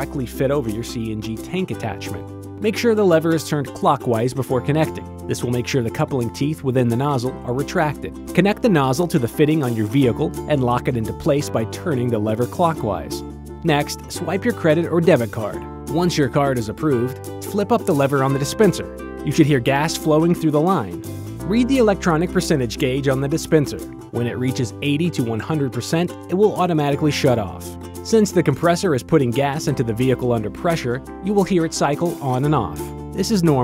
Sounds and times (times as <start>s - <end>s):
Music: 0.0s - 33.6s
Speech: 0.0s - 33.6s.